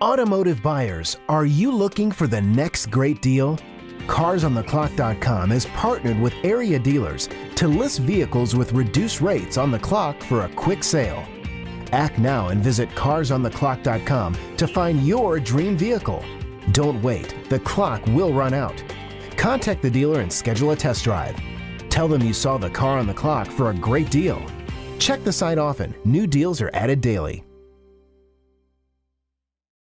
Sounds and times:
Speech: 0.0 - 11.3, 11.9 - 18.8, 19.4 - 27.4
Music: 0.0 - 29.2.

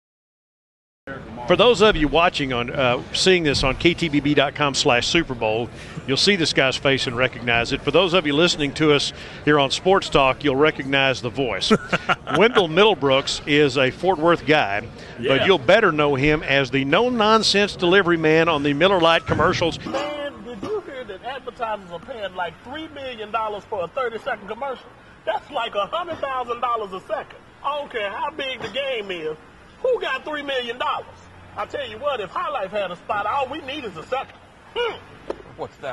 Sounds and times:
Speech: 1.1 - 35.9.

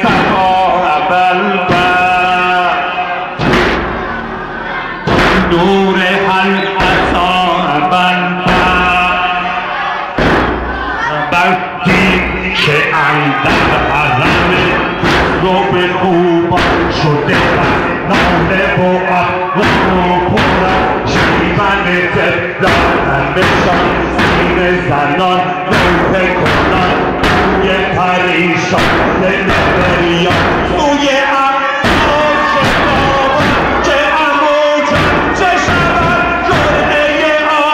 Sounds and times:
Music: 0.0 - 11.2, 13.3 - 31.2, 31.8 - 37.6
Inside, large room or hall: 0.0 - 37.7
Speech: 11.0 - 20.8.

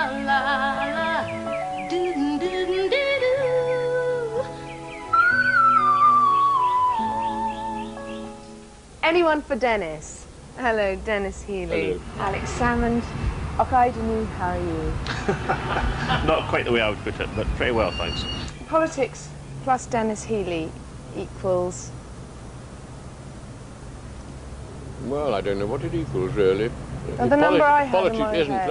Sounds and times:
Music: 0.0 - 9.3
Speech: 9.0 - 13.0, 16.3 - 21.9, 25.0 - 28.7.

